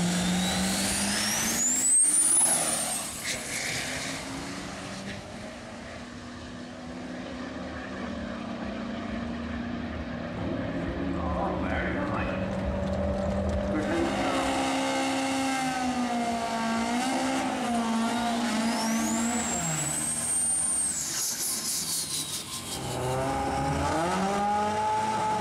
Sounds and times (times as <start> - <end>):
Outside, urban or manmade: 0.0 - 25.4
Race car, auto racing: 0.0 - 25.4
Speech: 11.1 - 12.5, 13.7 - 14.6.